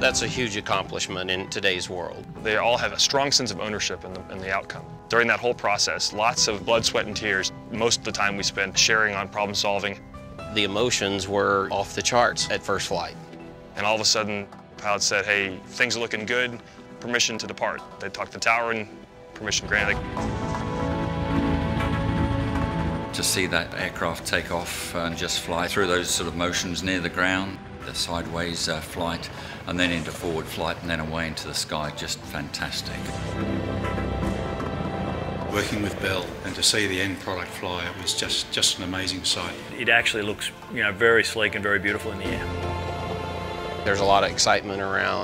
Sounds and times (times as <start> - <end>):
Speech: 0.0 - 13.2, 13.8 - 20.0, 23.2 - 33.2, 35.5 - 42.5, 43.9 - 45.2
Music: 0.0 - 45.2.